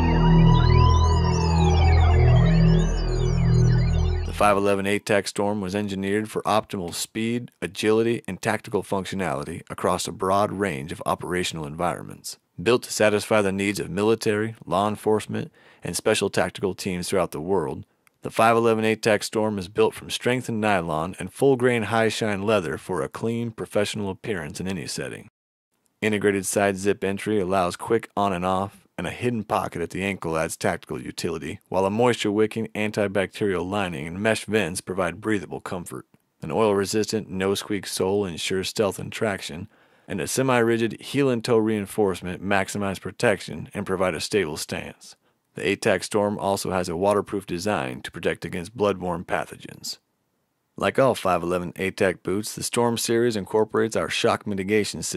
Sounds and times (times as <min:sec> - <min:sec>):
Speech: 0:04.3 - 0:25.3, 0:26.0 - 0:50.0, 0:50.8 - 0:55.1.